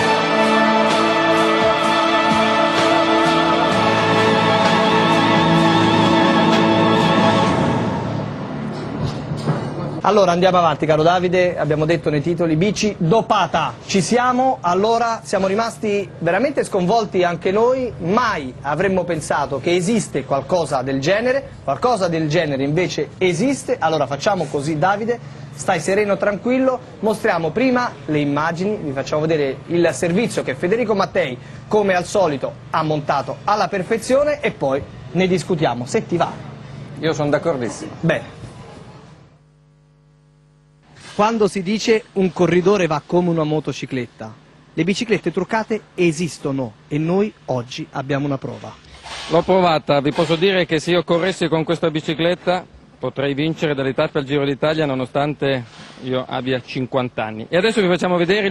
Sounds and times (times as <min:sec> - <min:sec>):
Music: 0:00.0 - 0:10.1
Speech: 0:10.0 - 0:36.4, 0:37.0 - 0:38.4, 0:41.2 - 0:58.5.